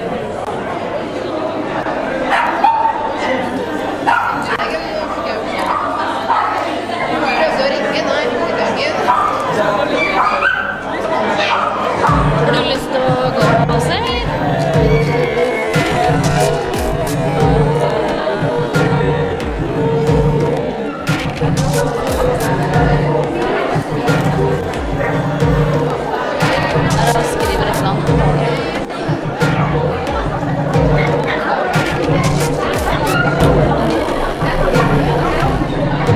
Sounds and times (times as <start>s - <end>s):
Speech: 0.0s - 20.5s, 21.4s - 36.1s
Music: 12.0s - 36.1s.